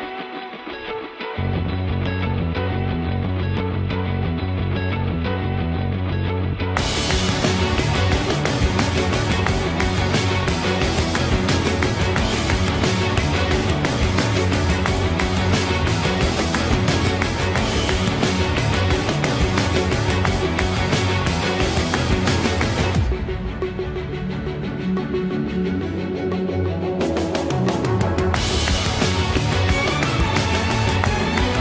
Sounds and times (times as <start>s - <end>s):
Music: 0.0s - 31.6s.